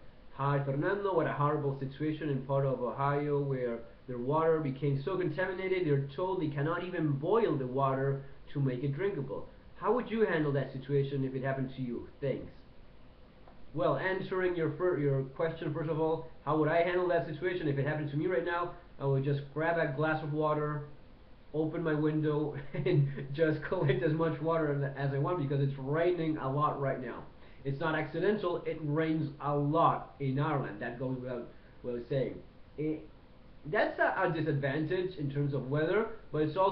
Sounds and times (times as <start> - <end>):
Speech: 0.3 - 12.7, 13.7 - 20.9, 21.5 - 36.7.